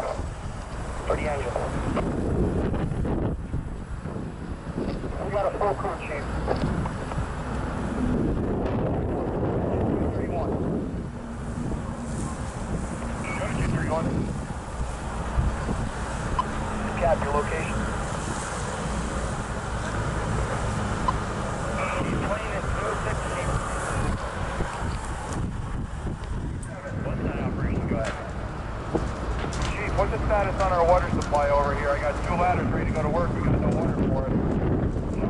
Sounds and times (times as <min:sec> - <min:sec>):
Speech: 0:01.0 - 0:01.8, 0:05.1 - 0:06.3, 0:09.7 - 0:10.6, 0:13.2 - 0:14.2, 0:16.9 - 0:17.8, 0:21.8 - 0:24.2, 0:26.6 - 0:28.3, 0:29.6 - 0:34.4.